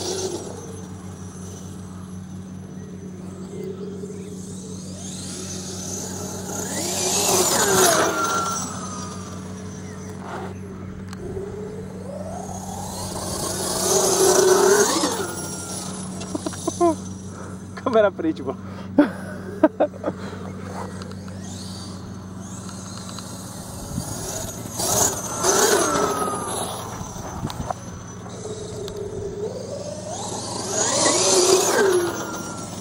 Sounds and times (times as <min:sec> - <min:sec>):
Speech: 0:17.8 - 0:18.6.